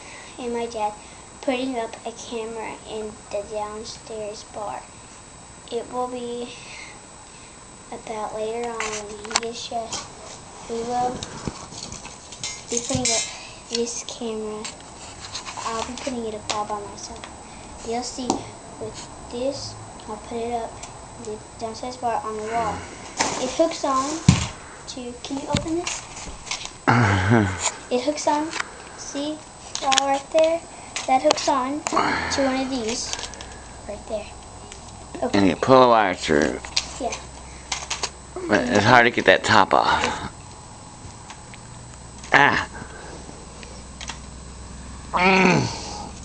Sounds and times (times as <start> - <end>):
Speech: 0.4 - 4.9, 7.9 - 10.0, 12.7 - 14.7, 15.6 - 17.2, 17.8 - 24.2.